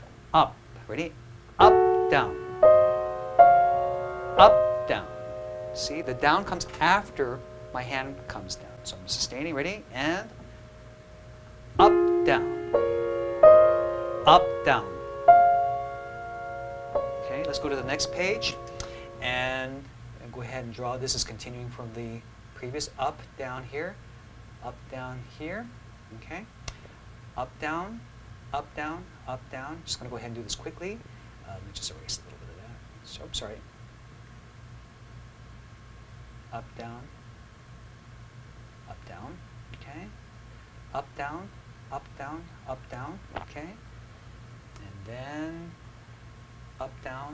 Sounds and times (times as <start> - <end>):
Piano: 1.6 - 19.8.